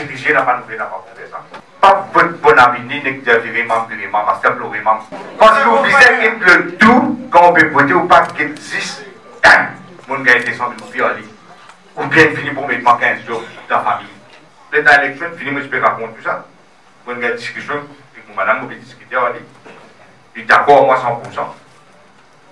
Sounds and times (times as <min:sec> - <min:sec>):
Speech: 0:00.0 - 0:16.5, 0:17.1 - 0:19.6, 0:20.3 - 0:21.8.